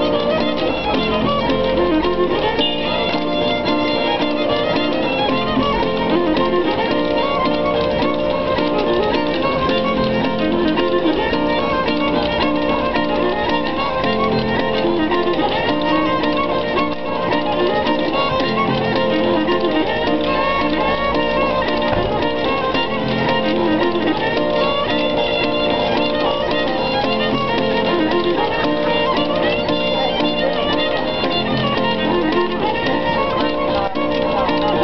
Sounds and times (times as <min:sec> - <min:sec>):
Musical instrument: 0:00.0 - 0:34.8.